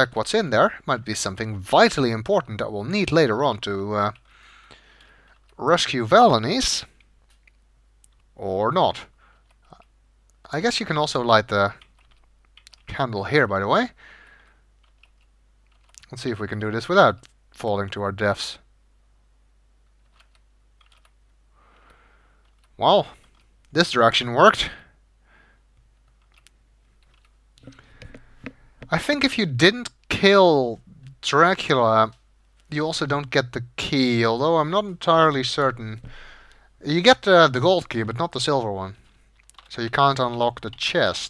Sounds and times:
Speech: 0.0 - 4.2, 5.6 - 6.9, 8.4 - 9.1, 10.5 - 11.8, 12.8 - 14.0, 16.0 - 18.7, 22.8 - 24.9, 28.9 - 36.0, 36.8 - 39.0, 39.7 - 41.2.

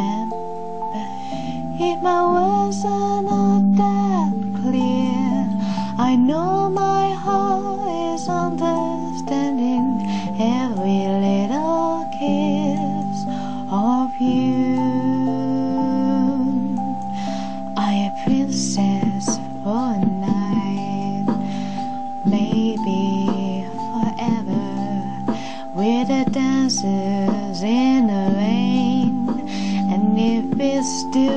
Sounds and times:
Female singing: 0.0 - 0.3, 1.8 - 16.8, 17.8 - 21.5, 22.2 - 31.3
Music: 0.0 - 31.3.

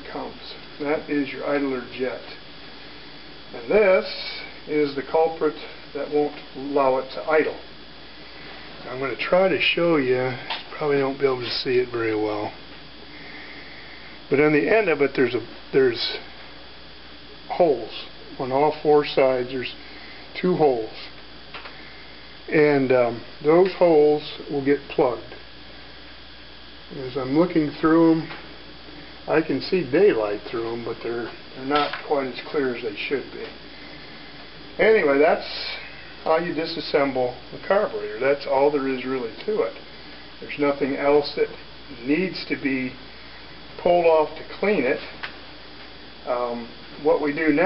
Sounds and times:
Speech: 0.0 - 2.4, 3.5 - 7.7, 8.8 - 12.6, 14.3 - 16.3, 17.5 - 21.2, 22.5 - 25.4, 26.9 - 28.4, 29.3 - 33.6, 34.8 - 39.8, 40.4 - 43.0, 43.8 - 45.2, 46.2 - 47.6.

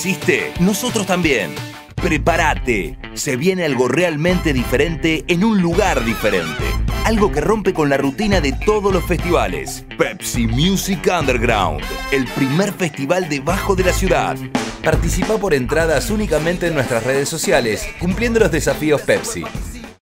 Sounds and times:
Background music: 0.0 - 20.0.

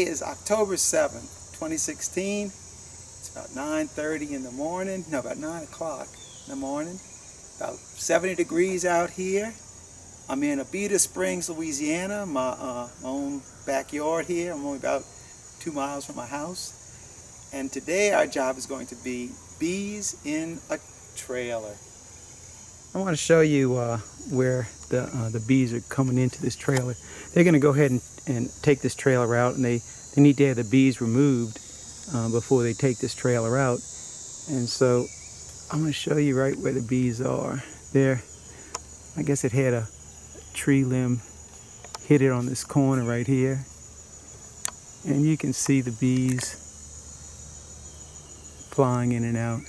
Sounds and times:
Speech: 0.0 - 2.6, 3.2 - 7.0, 7.6 - 9.6, 10.3 - 16.8, 17.5 - 21.8, 22.9 - 33.8, 34.5 - 35.1, 35.7 - 38.3, 39.2 - 39.9, 40.5 - 41.2, 42.0 - 43.7, 45.0 - 46.6, 48.7 - 49.6.

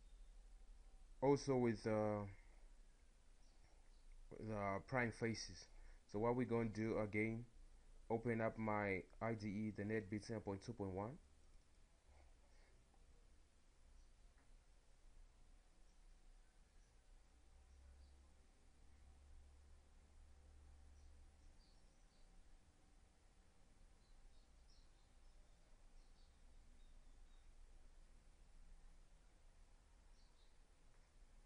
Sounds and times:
Speech: 1.2 - 2.4, 4.3 - 7.5, 8.1 - 11.2.

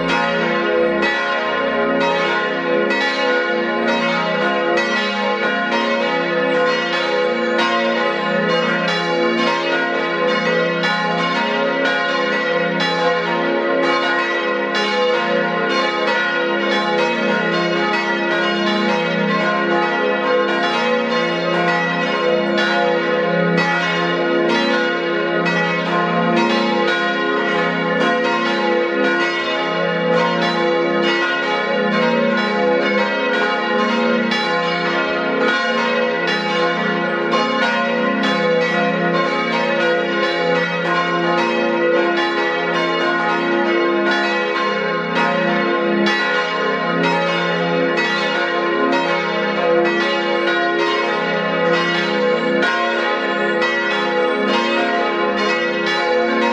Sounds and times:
Change ringing (campanology): 0.0 - 56.5.

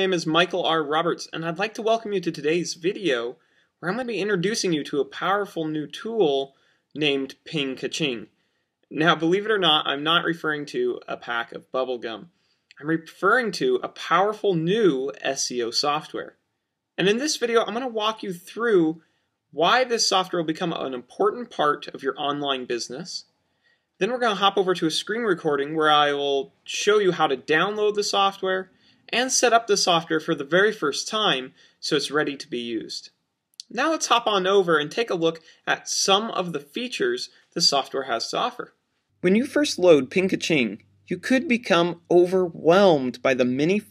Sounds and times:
Speech: 0.0 - 8.3, 8.9 - 16.4, 17.0 - 19.0, 19.6 - 23.2, 24.0 - 43.9.

